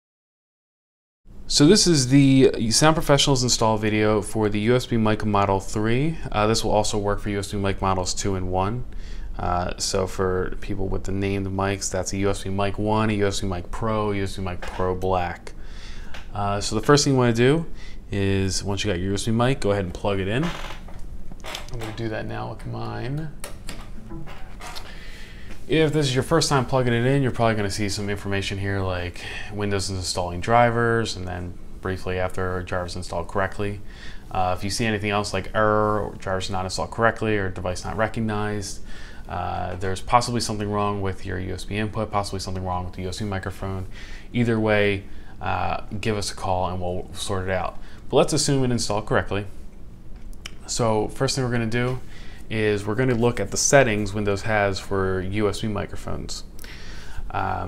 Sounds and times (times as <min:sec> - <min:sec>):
Speech: 0:01.5 - 0:15.6, 0:16.2 - 0:20.7, 0:21.6 - 0:23.4, 0:25.7 - 0:49.6, 0:50.5 - 0:56.5, 0:57.3 - 0:57.6.